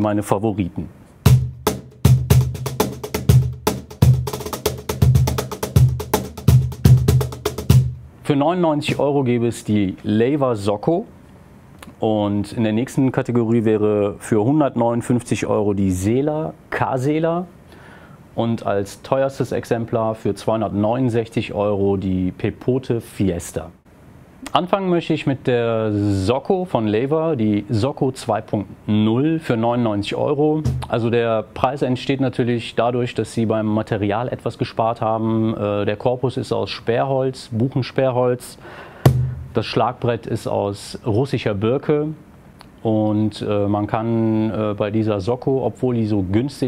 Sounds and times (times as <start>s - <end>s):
Speech: 0.0s - 1.0s, 8.2s - 11.1s, 11.8s - 17.5s, 18.4s - 23.8s, 24.4s - 38.6s, 39.6s - 42.2s, 42.8s - 46.6s.